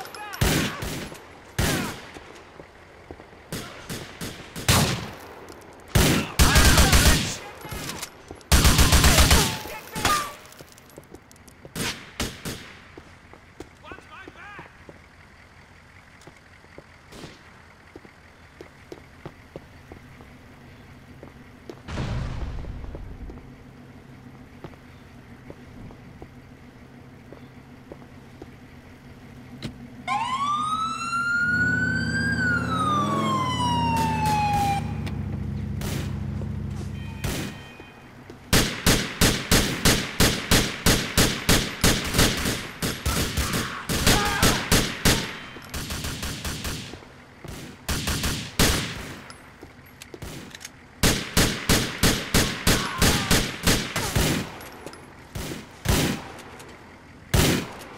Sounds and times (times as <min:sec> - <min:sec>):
Police car (siren): 0:30.0 - 0:35.4.